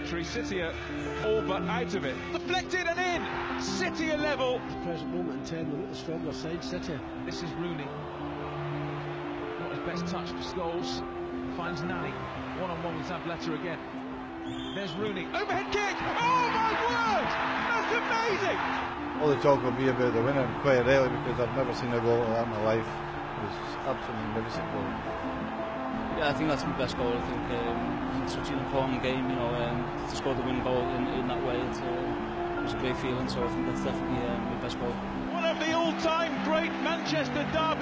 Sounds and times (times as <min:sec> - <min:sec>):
Music: 0:00.0 - 0:37.8
Speech: 0:19.2 - 0:24.9, 0:26.2 - 0:32.1, 0:32.7 - 0:37.8.